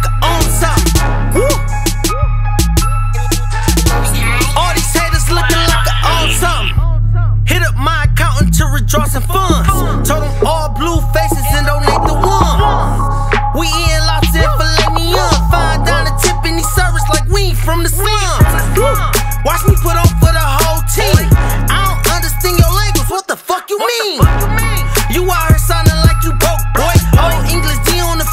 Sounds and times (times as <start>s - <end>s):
Exciting music: 0.0s - 6.8s, 9.1s - 23.1s, 24.2s - 28.3s.